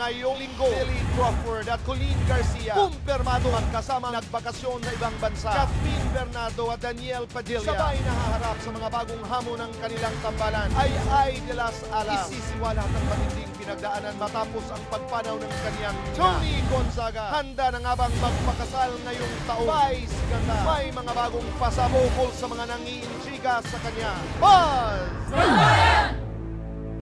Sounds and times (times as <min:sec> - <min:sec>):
Speech: 0:00.0 - 0:26.2
Music: 0:00.0 - 0:27.0.